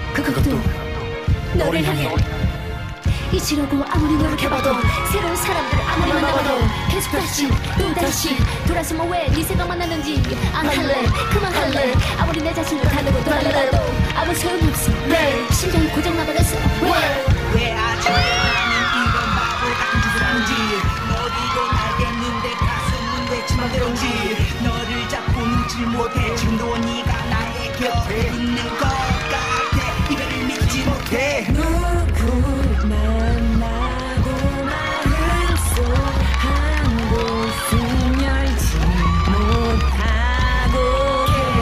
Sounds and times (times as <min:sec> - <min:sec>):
Music: 0:00.0 - 0:41.6.